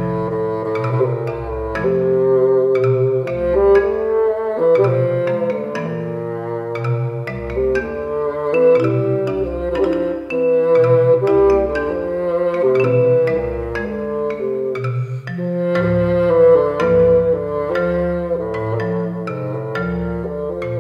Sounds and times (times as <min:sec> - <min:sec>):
Marimba, xylophone: 0:00.0 - 0:20.8.